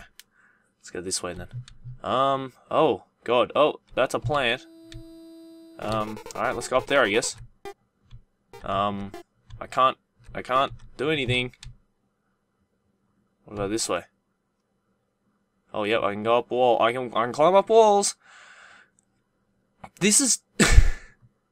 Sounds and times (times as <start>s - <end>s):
Speech: 0.9s - 4.6s, 5.8s - 7.4s, 8.6s - 11.6s, 13.5s - 14.1s, 15.7s - 18.2s, 19.9s - 20.5s.